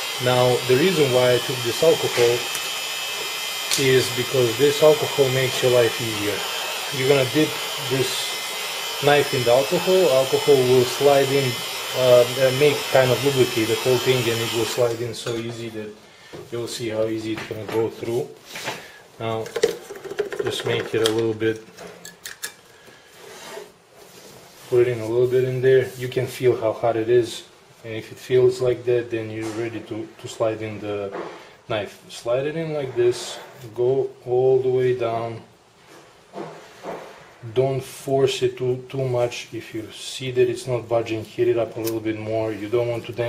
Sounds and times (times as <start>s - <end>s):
Speech: 0.2s - 2.5s, 3.8s - 8.4s, 9.0s - 18.4s, 19.2s - 19.6s, 20.4s - 21.7s, 24.7s - 35.5s, 37.4s - 43.2s.